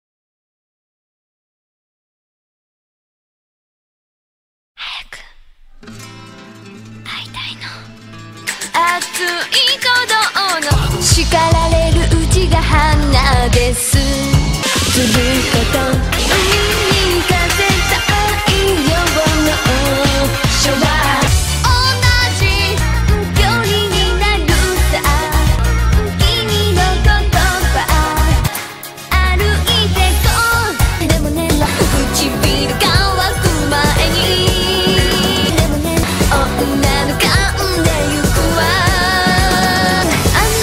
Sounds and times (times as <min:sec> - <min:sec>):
Singing: 0:08.8 - 0:28.6, 0:29.2 - 0:40.6.